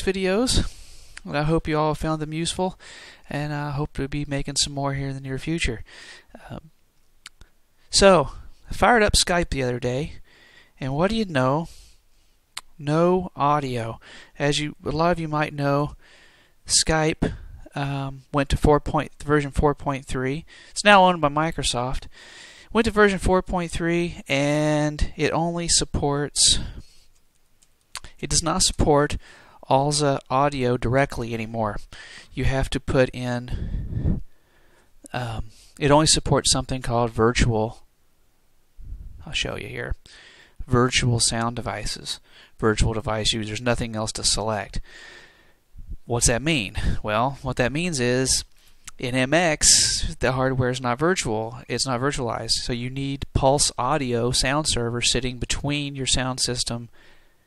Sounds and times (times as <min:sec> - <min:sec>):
Speech: 0:00.0 - 0:06.7, 0:07.9 - 0:10.2, 0:10.8 - 0:11.7, 0:12.7 - 0:16.0, 0:16.7 - 0:22.1, 0:22.7 - 0:26.8, 0:28.0 - 0:33.7, 0:35.1 - 0:37.9, 0:39.2 - 0:40.0, 0:40.7 - 0:44.8, 0:46.1 - 0:56.9.